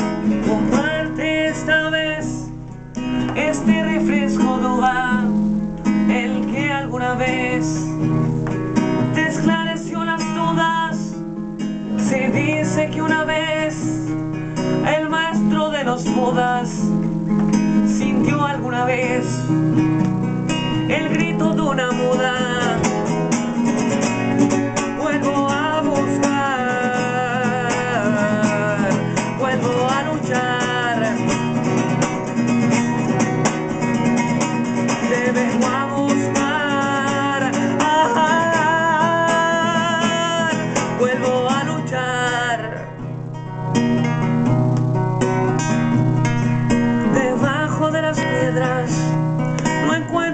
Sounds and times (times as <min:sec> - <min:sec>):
Music: 0:00.0 - 0:50.3.